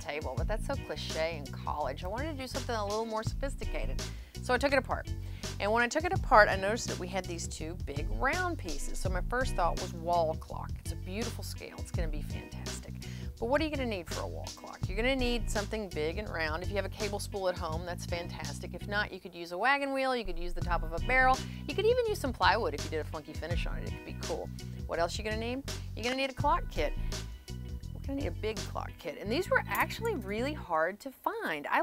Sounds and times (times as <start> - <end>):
Speech: 0.0 - 27.0, 28.0 - 31.8
Music: 0.0 - 31.8.